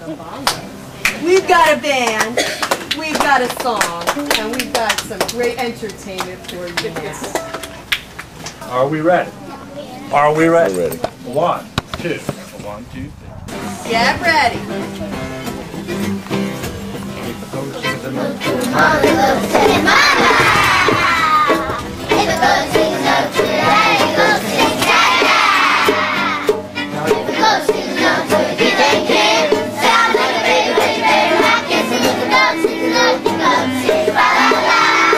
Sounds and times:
Music: 0.0s - 8.4s, 13.4s - 35.1s.

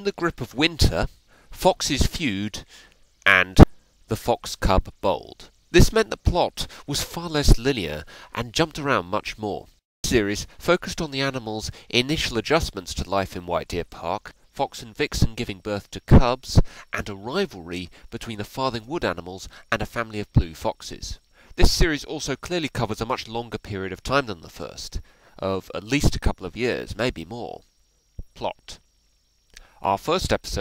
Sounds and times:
Speech: 0.0s - 2.7s, 3.3s - 27.6s, 28.4s - 28.8s, 29.8s - 30.6s.

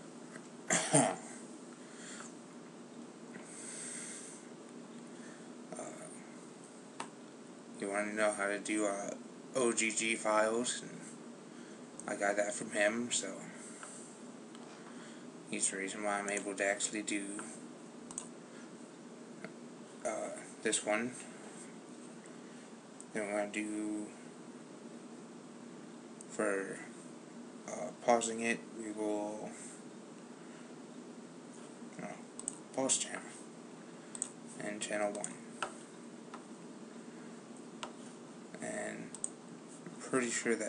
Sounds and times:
Inside, small room: 0.0s - 40.6s
Speech: 5.8s - 6.2s, 7.8s - 11.1s, 12.1s - 13.6s, 15.5s - 17.6s, 20.0s - 21.3s, 23.1s - 24.2s, 26.3s - 27.0s, 27.7s - 29.7s, 32.0s - 32.2s, 32.8s - 33.4s, 34.6s - 35.4s, 38.6s - 39.1s, 40.0s - 40.6s.

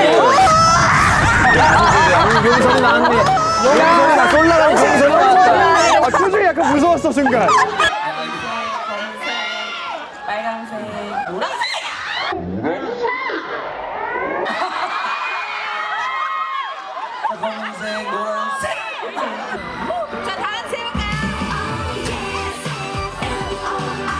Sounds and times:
Music: 2.2s - 10.0s, 19.5s - 24.1s.

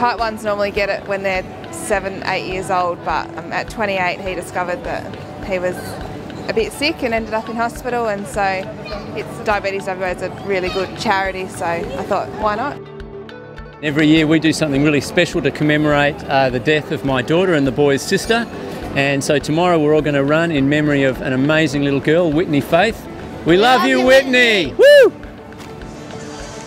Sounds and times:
Music: 0.0s - 26.6s.

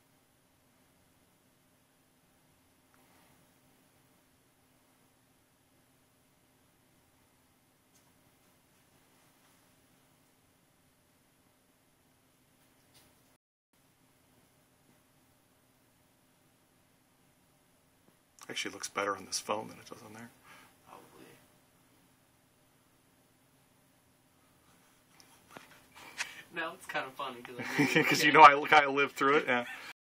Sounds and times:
Speech: 18.4s - 21.4s, 26.5s - 29.9s.

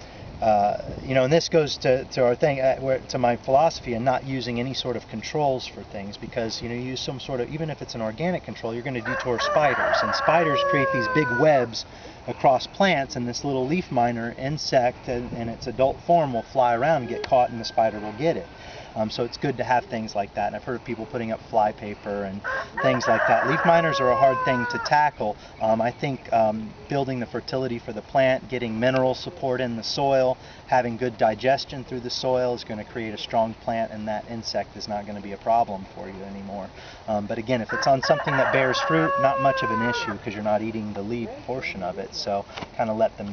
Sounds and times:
Speech: 0.4s - 43.3s.

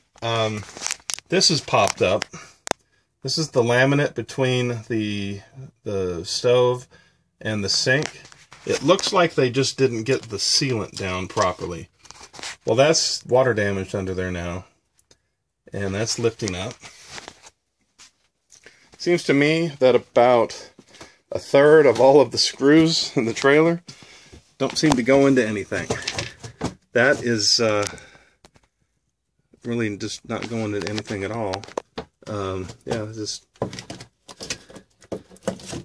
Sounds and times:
Inside, small room: 0.0s - 35.8s
Speech: 0.2s - 2.5s, 3.2s - 11.9s, 12.6s - 14.7s, 15.7s - 16.8s, 19.0s - 23.9s, 24.6s - 26.2s, 27.0s - 28.0s, 29.6s - 33.5s.

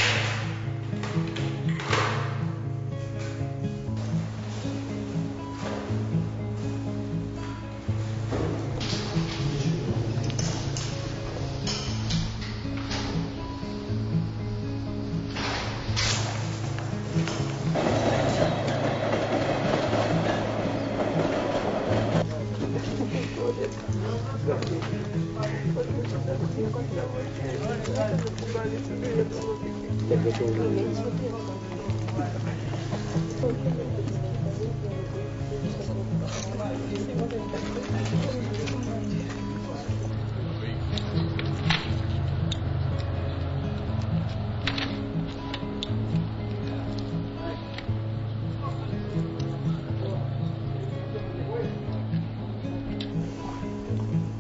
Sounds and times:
Background music: 0.0s - 54.4s
Speech: 22.2s - 40.0s.

